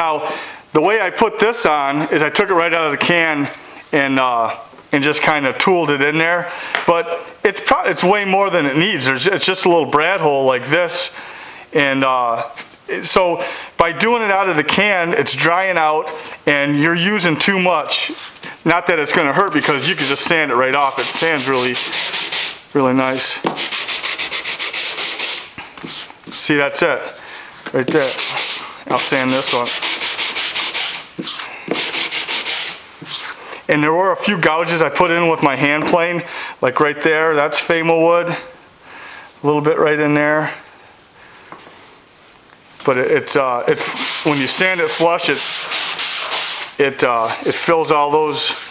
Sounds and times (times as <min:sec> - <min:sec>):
Rub: 0:17.9 - 0:18.4, 0:19.6 - 0:26.6, 0:27.3 - 0:33.4, 0:43.7 - 0:48.7
Sanding: 0:19.6 - 0:26.6, 0:27.9 - 0:33.4, 0:43.7 - 0:46.8, 0:47.6 - 0:48.7
Wood: 0:23.4 - 0:26.4.